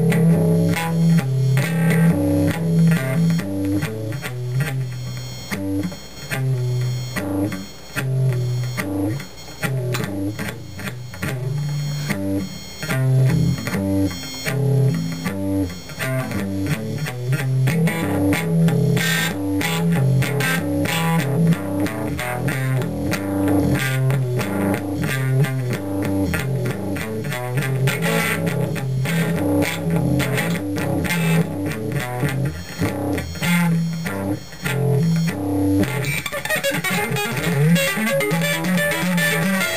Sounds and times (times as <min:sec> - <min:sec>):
Electric guitar: 0:00.0 - 0:39.7.